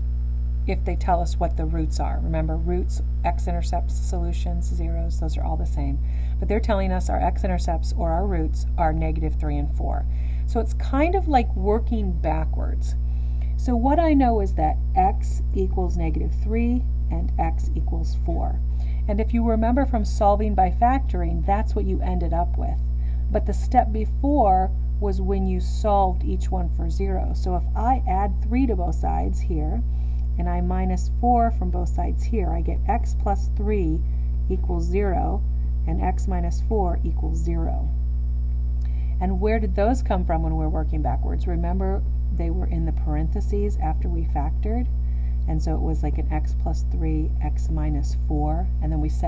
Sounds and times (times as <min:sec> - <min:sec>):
Speech: 0:00.7 - 0:13.0, 0:13.6 - 0:29.8, 0:30.4 - 0:37.9, 0:39.2 - 0:44.9, 0:45.5 - 0:49.2.